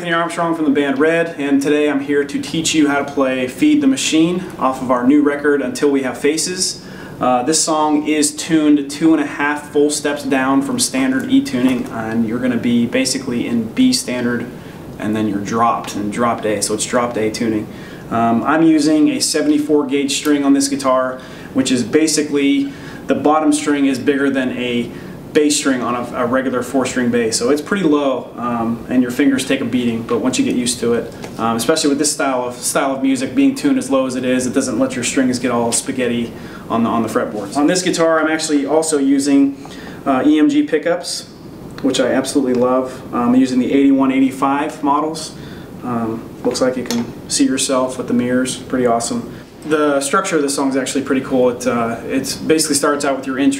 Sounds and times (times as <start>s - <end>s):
Speech: 0.0s - 53.5s.